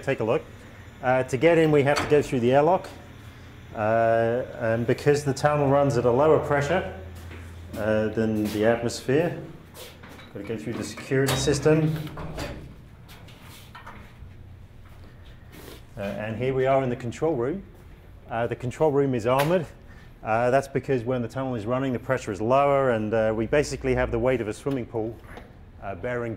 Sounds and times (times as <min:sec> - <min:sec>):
Speech: 0:00.0 - 0:03.0, 0:03.8 - 0:07.1, 0:07.7 - 0:09.5, 0:10.4 - 0:12.1, 0:16.0 - 0:17.7, 0:18.3 - 0:25.2, 0:25.8 - 0:26.3.